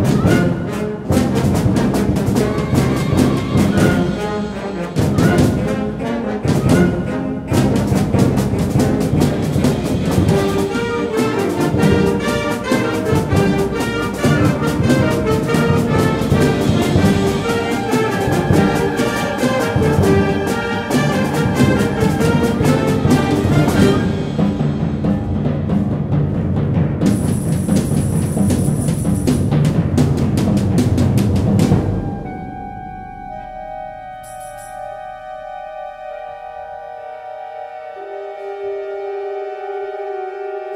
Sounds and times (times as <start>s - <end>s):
Orchestra: 0.0s - 32.6s
Timpani: 0.0s - 40.7s.